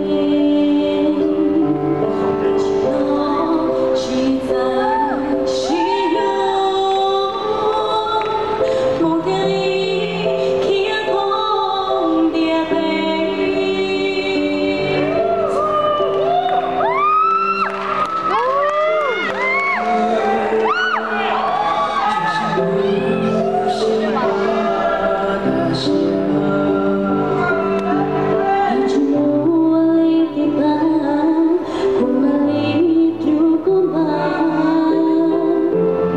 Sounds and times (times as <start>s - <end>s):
Female singing: 0.0s - 16.8s, 19.3s - 21.4s, 22.0s - 36.1s
Music: 0.0s - 36.1s.